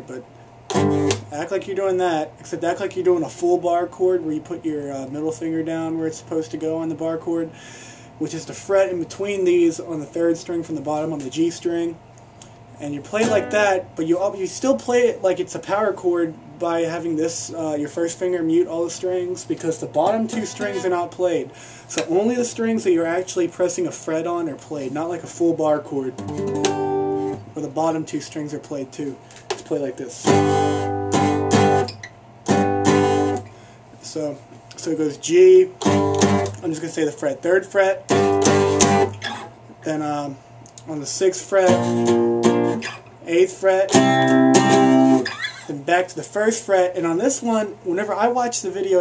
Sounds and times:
Speech: 0.0 - 0.3, 1.3 - 7.5, 8.2 - 12.0, 12.8 - 26.2, 27.6 - 30.3, 34.0 - 35.8, 36.6 - 38.1, 39.8 - 41.8, 43.2 - 44.0, 45.7 - 49.0
Guitar: 0.0 - 7.6, 8.2 - 49.0.

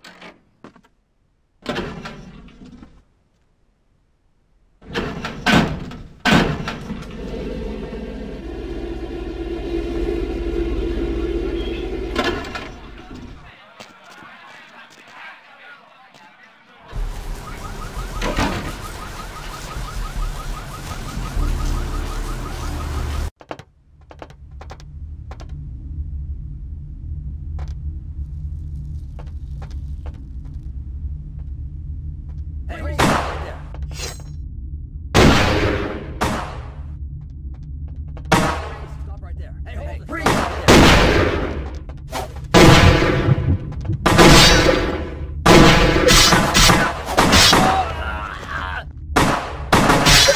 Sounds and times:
Gunshot, gunfire: 33.0 - 33.6, 35.2 - 36.7, 38.3 - 38.8, 40.3 - 41.6, 42.6 - 47.9, 49.2 - 50.3.

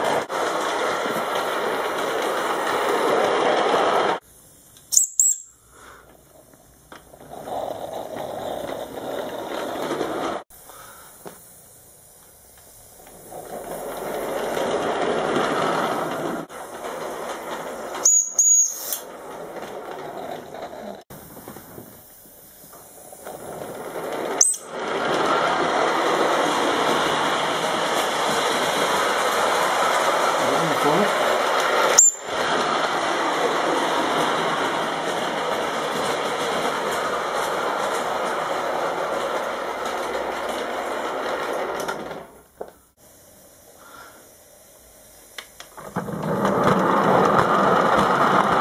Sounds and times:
Train: 0.0 - 48.6.

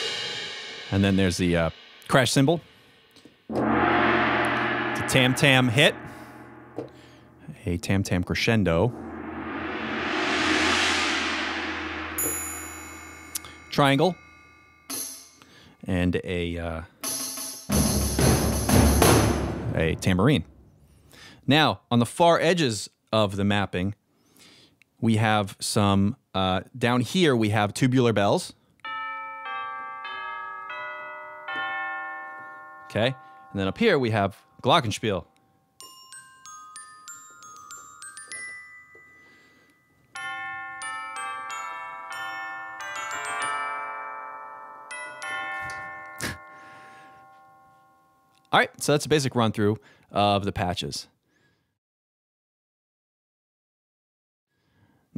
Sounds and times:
Ding-dong: 28.9 - 33.7, 36.1 - 48.4.

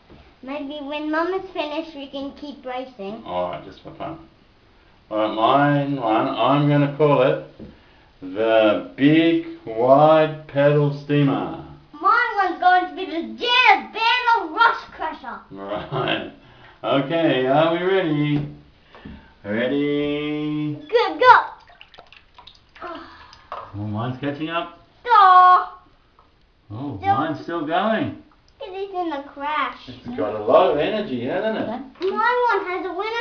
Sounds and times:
Child speech, kid speaking: 0.4 - 3.5, 12.0 - 15.9, 20.8 - 21.6, 22.8 - 23.2, 25.0 - 25.9, 26.9 - 27.4, 28.6 - 30.8, 32.0 - 33.2.

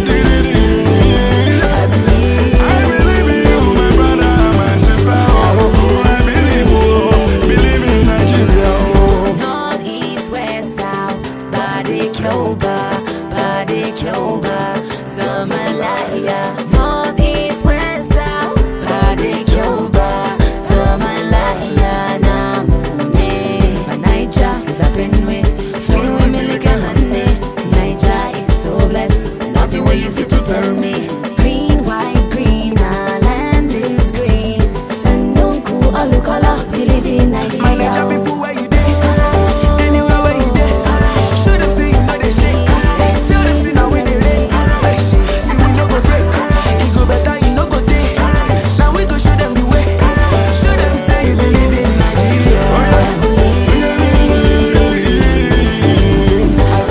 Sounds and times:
Afrobeat: 0.0 - 56.9
Electronic music: 0.0 - 56.9.

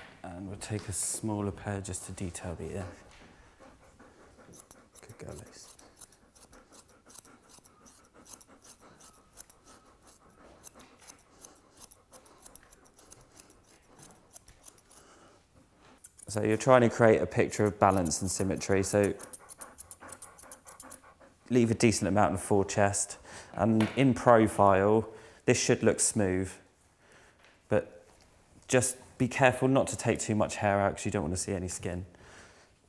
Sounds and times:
Speech: 0.2 - 3.0, 5.0 - 5.7, 16.3 - 19.2, 21.5 - 26.6, 28.7 - 32.1
Dog: 2.1 - 15.0, 16.6 - 22.5.

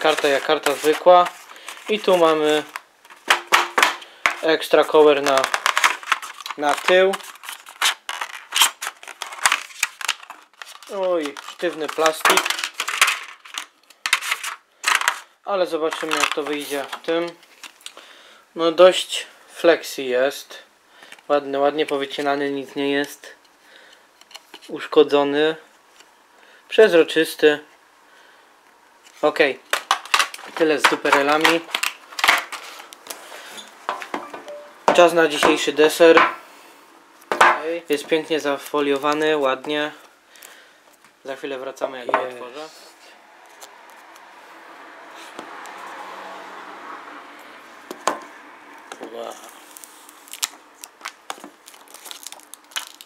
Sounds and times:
Speech: 0.0 - 2.7, 4.4 - 5.5, 6.6 - 7.2, 10.9 - 12.5, 15.5 - 17.4, 18.6 - 20.7, 21.3 - 23.4, 24.7 - 25.7, 26.7 - 27.7, 29.2 - 29.6, 30.6 - 31.7, 34.9 - 36.2, 37.6 - 40.0, 41.2 - 43.0, 49.0 - 49.5.

